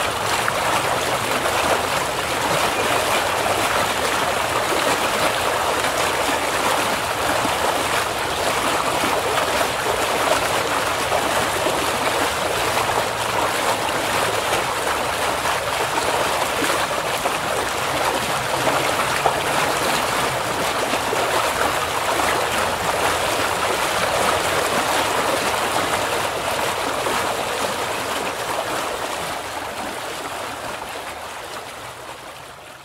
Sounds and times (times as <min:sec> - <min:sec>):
Stream: 0:00.0 - 0:32.8.